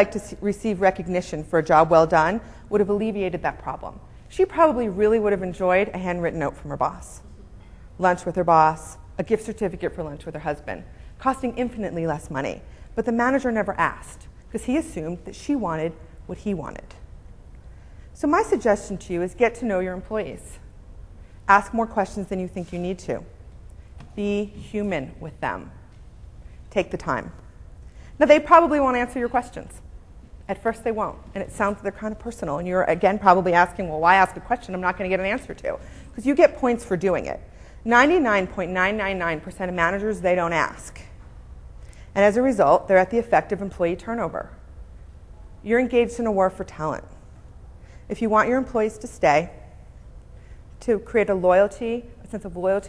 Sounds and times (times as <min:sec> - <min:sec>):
Speech: 0:00.0 - 0:07.2, 0:08.0 - 0:17.0, 0:18.2 - 0:20.6, 0:24.2 - 0:25.8, 0:28.2 - 0:29.8, 0:30.5 - 0:41.1, 0:42.2 - 0:44.6, 0:48.1 - 0:49.5, 0:50.8 - 0:52.8.